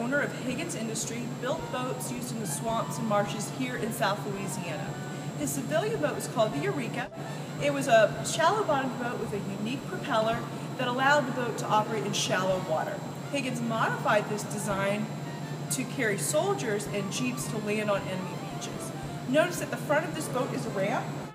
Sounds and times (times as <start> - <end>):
Speech: 0.0 - 15.1, 15.7 - 21.2.